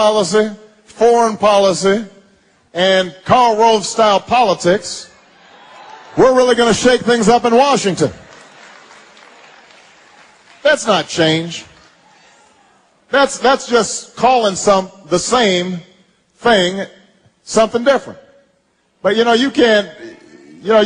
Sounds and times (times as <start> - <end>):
Speech: 0.0 - 2.1, 2.7 - 5.2, 6.2 - 8.2, 10.6 - 11.7, 13.1 - 16.9, 17.5 - 18.2, 19.0 - 20.8.